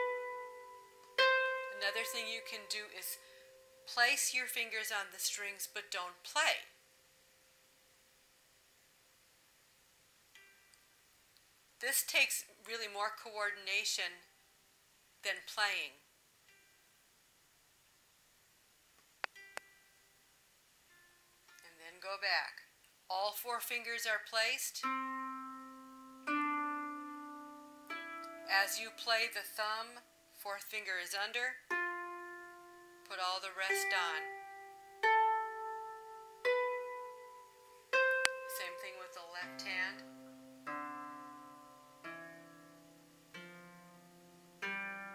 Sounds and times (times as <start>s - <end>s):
Harp: 0.0s - 4.1s, 24.8s - 29.3s, 31.7s - 45.1s.